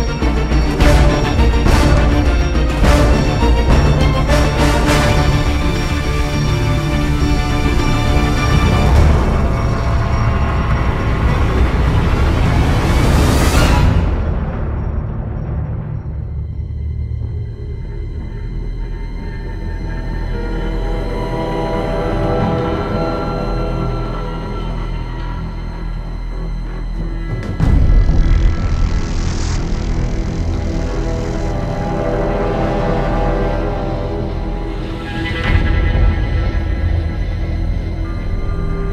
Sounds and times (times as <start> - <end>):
Soundtrack music: 0.0 - 38.9
Video game music: 0.0 - 38.9.